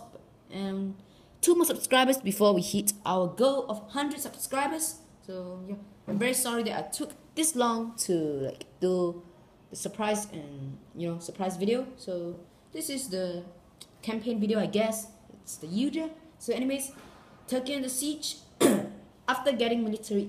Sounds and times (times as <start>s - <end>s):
Speech: 0.0s - 18.5s, 19.3s - 20.2s.